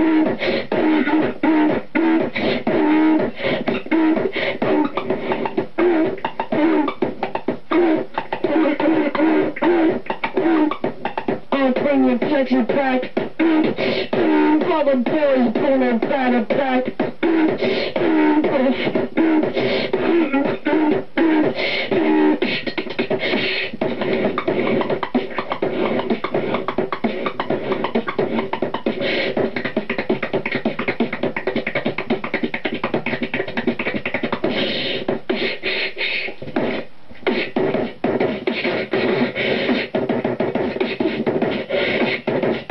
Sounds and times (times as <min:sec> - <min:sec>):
Beatboxing: 0:00.0 - 0:42.7.